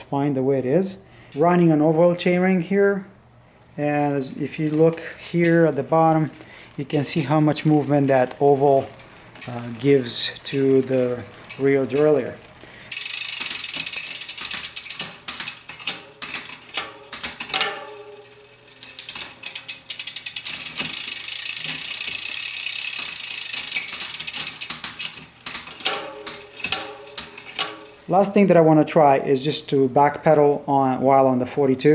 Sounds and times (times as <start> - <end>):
Bicycle: 4.4 - 28.4.